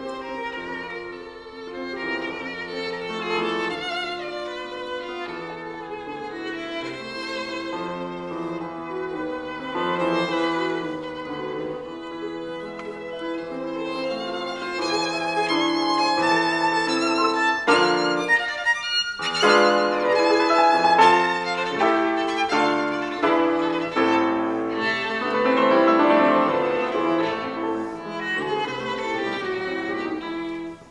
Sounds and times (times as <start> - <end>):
Violin, fiddle: 0.0 - 30.9.